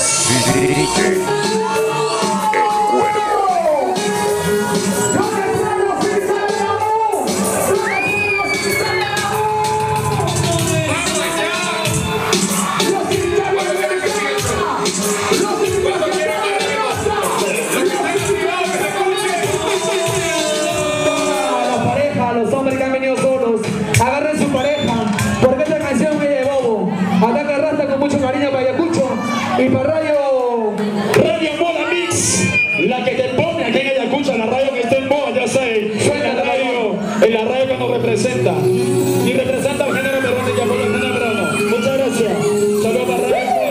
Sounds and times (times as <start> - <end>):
Disco: 0.0 - 26.9.